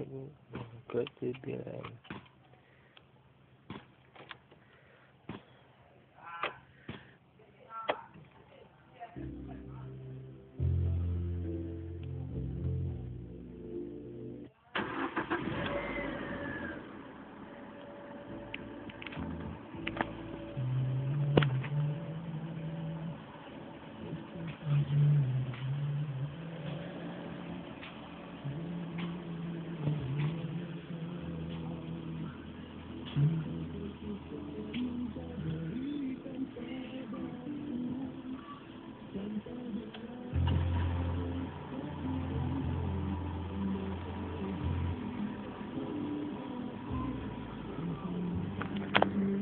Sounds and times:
Music: 9.2s - 14.5s, 17.8s - 49.4s.

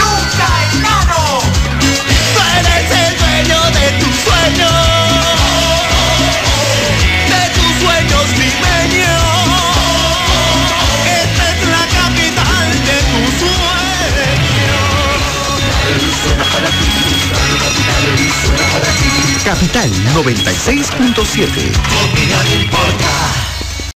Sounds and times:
Music: 0.0s - 23.9s
Speech: 19.3s - 21.8s.

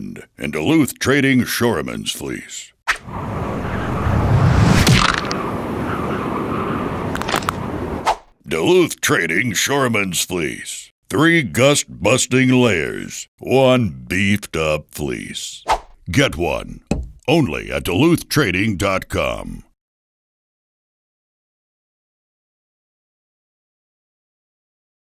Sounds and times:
Speech: 0.0s - 2.8s, 8.4s - 19.8s.

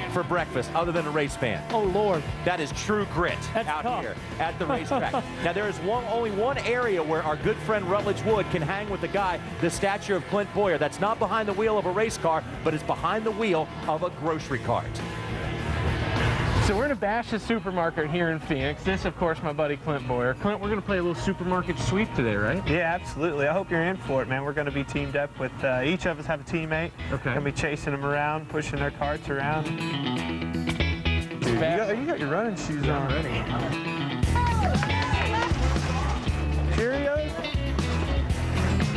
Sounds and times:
Speech: 0.0s - 15.0s, 16.7s - 29.7s, 31.4s - 33.8s
Music: 0.0s - 38.9s.

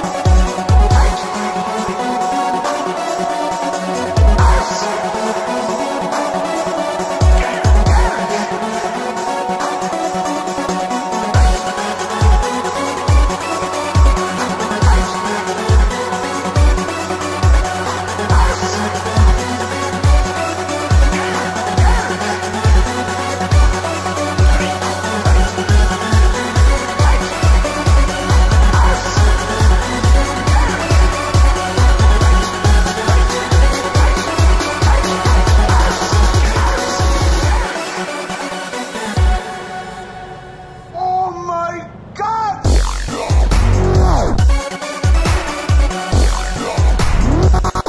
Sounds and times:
Dubstep: 0.0s - 39.7s, 42.6s - 47.8s.

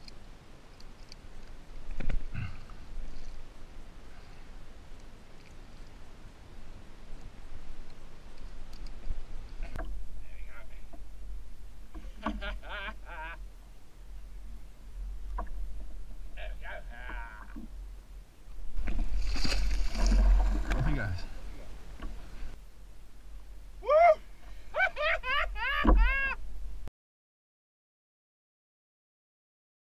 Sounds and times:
Boat, Water vehicle: 0.0s - 26.9s
Speech: 10.2s - 10.9s, 20.8s - 21.3s.

